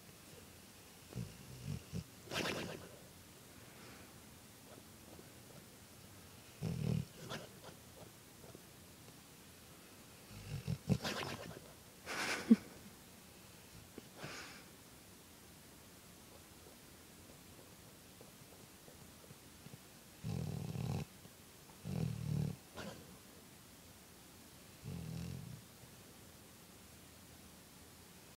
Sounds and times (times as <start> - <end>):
Dog: 1.1 - 3.1, 4.6 - 5.7, 6.6 - 8.7, 10.4 - 11.8, 21.8 - 23.2.